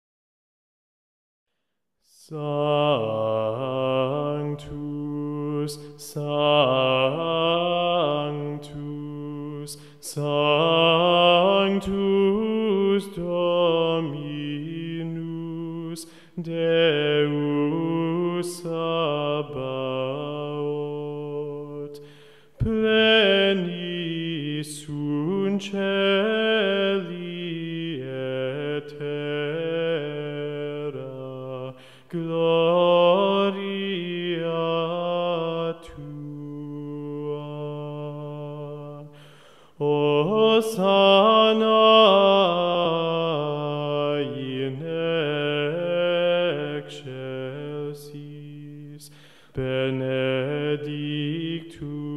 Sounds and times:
Mantra: 2.2s - 22.0s, 22.6s - 39.1s, 39.8s - 52.1s.

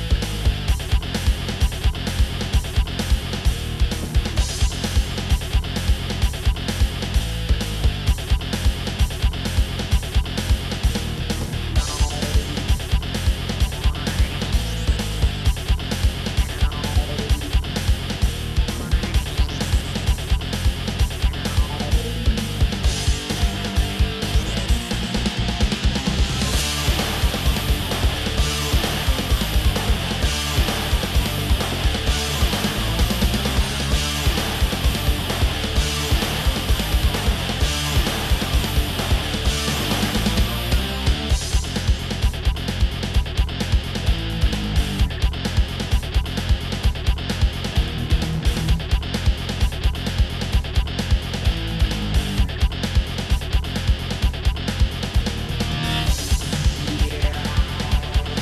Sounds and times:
Music: 0.0s - 58.4s.

